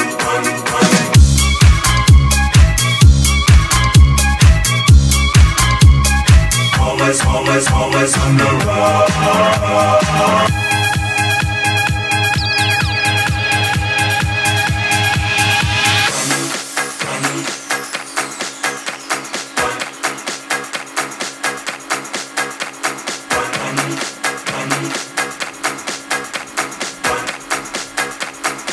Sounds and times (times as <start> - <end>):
Electronic dance music: 0.0 - 28.7.